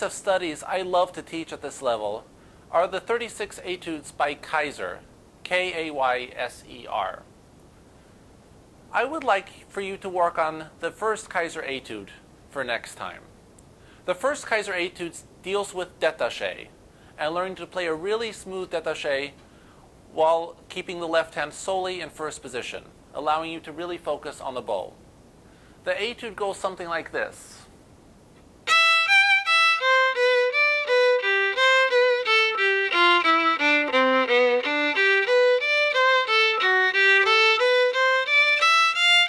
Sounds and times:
Speech: 0.0 - 7.3, 8.9 - 13.3, 14.1 - 19.4, 20.1 - 25.0, 25.8 - 27.7.

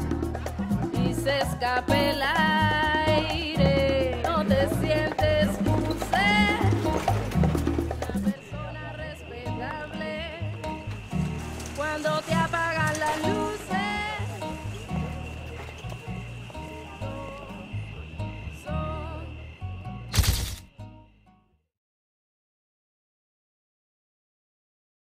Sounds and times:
Tender music: 0.0 - 21.2.

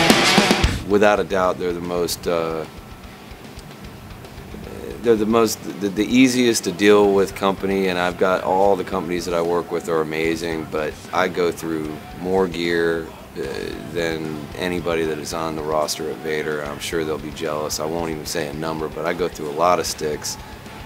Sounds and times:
Music: 0.0 - 20.8
Speech: 0.8 - 2.7, 4.6 - 20.4.

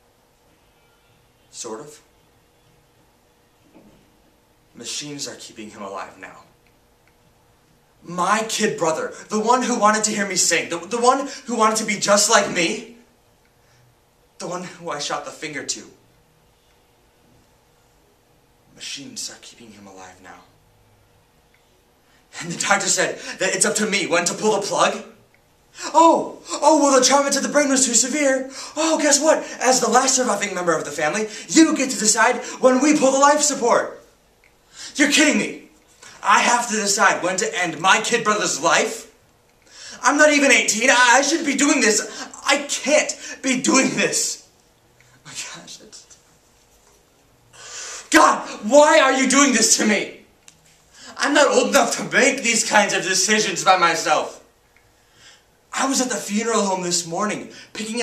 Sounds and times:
Narration, monologue: 1.4 - 58.0.

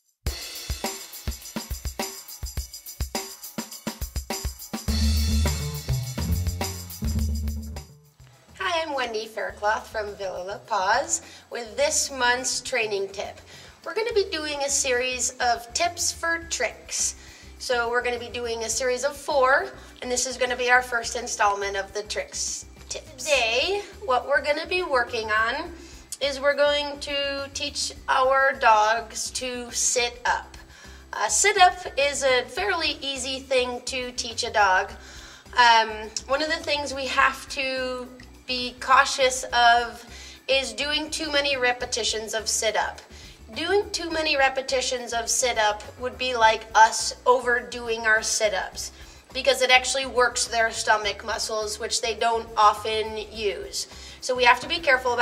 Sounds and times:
Music: 0.0 - 55.2
Speech: 8.6 - 30.6, 31.2 - 35.0, 35.6 - 55.2.

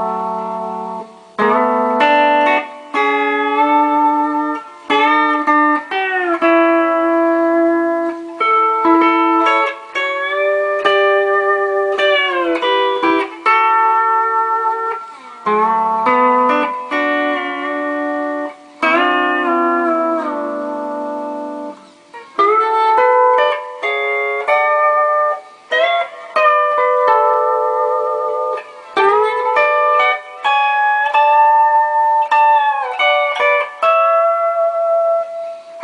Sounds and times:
Music: 0.0 - 35.8.

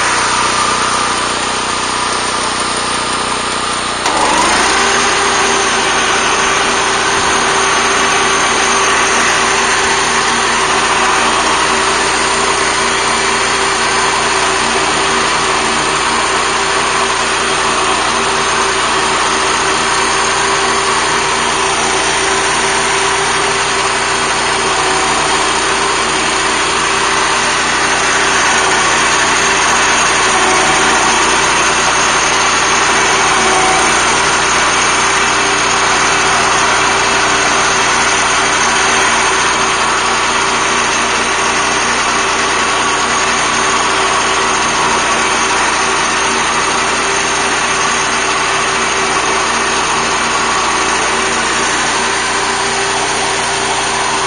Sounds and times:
Outside, rural or natural: 0.0 - 54.2.

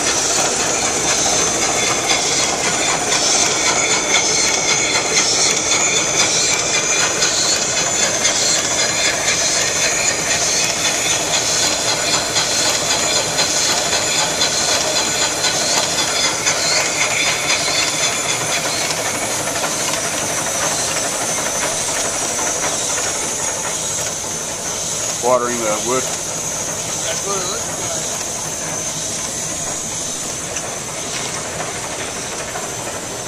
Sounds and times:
Engine: 0.0 - 33.2
Steam: 0.0 - 33.2
Speech: 25.2 - 26.1, 27.0 - 28.1.

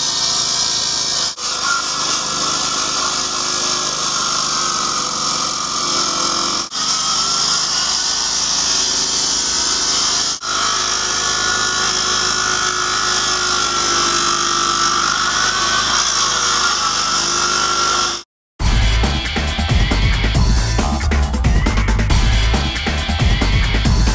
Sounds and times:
Power tool: 0.0 - 24.1
Music: 18.6 - 24.1.

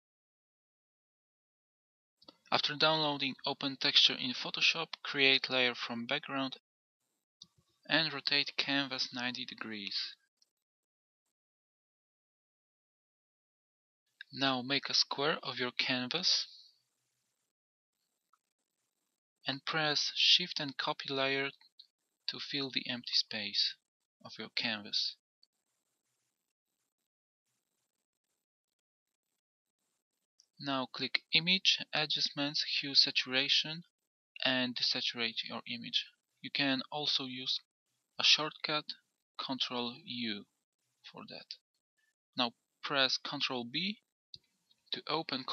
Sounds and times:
Speech: 2.5 - 6.6, 7.9 - 10.2, 14.2 - 16.6, 19.5 - 21.7, 22.3 - 25.2, 30.6 - 40.5, 41.1 - 41.6, 42.4 - 44.1, 45.0 - 45.5.

